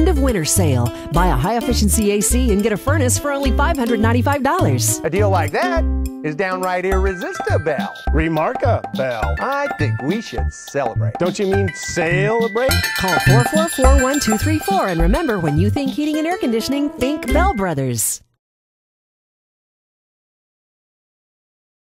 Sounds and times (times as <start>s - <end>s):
Music: 0.0s - 18.2s
Speech: 0.0s - 18.2s.